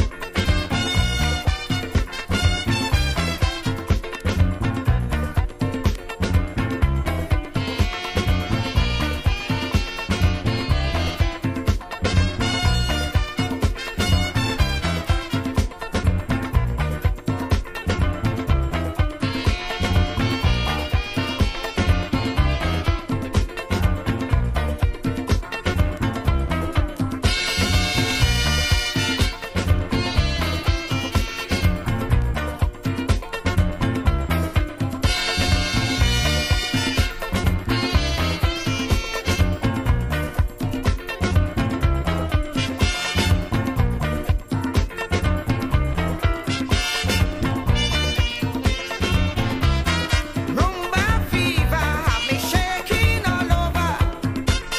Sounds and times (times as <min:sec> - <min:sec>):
Music: 0:00.0 - 0:54.7.